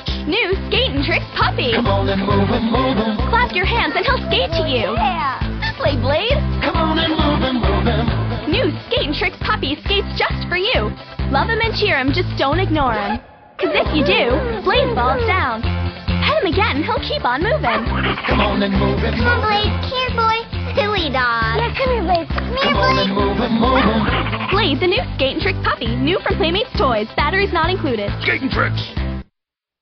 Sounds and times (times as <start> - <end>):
Music for children: 0.0 - 12.8, 13.6 - 29.2
Speech: 8.6 - 15.6, 20.8 - 23.3, 24.5 - 28.9.